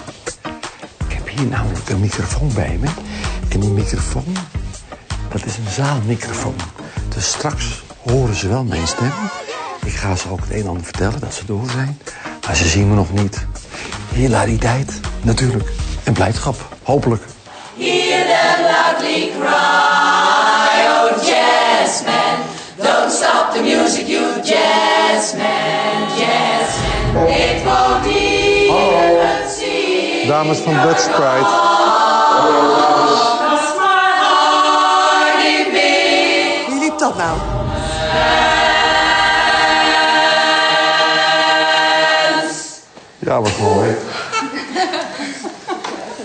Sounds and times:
A capella: 1.0s - 43.0s
Choir: 17.5s - 43.0s.

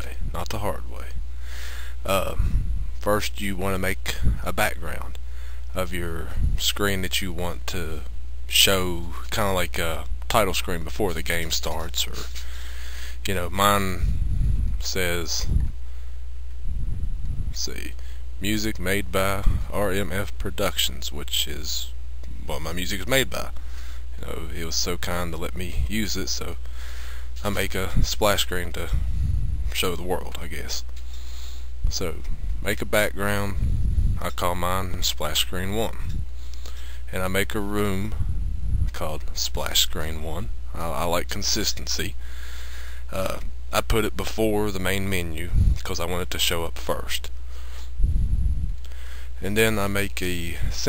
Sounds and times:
Speech: 0.0s - 1.2s, 2.0s - 12.4s, 13.2s - 14.2s, 14.8s - 15.6s, 17.5s - 23.6s, 24.2s - 26.6s, 27.4s - 29.0s, 29.7s - 30.9s, 31.9s - 33.6s, 34.2s - 36.1s, 37.1s - 38.3s, 38.9s - 42.2s, 43.1s - 47.3s, 49.4s - 50.8s.

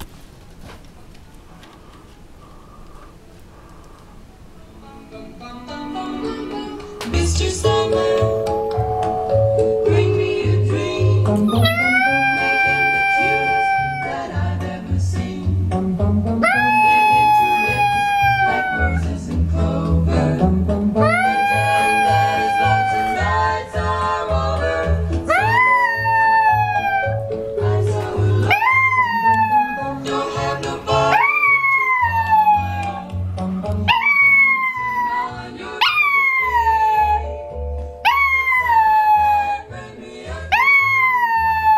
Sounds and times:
Canidae, dogs, wolves: 33.8s - 37.3s, 40.5s - 41.7s.

